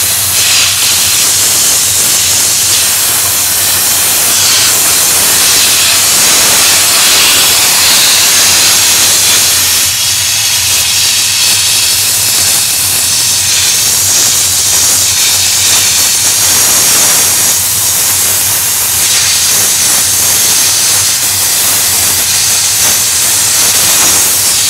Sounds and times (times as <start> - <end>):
Hiss: 0.0 - 24.6.